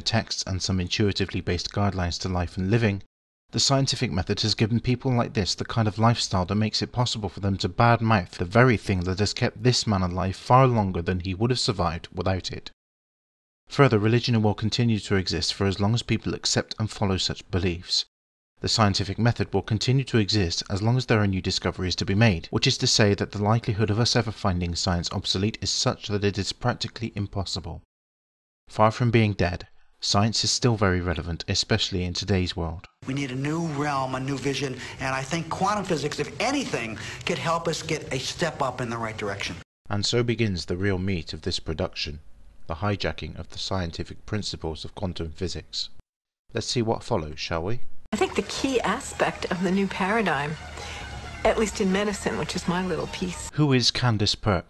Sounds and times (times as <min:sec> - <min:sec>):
Speech: 0:00.0 - 0:12.8, 0:13.7 - 0:27.9, 0:28.7 - 0:50.6, 0:51.5 - 0:54.7.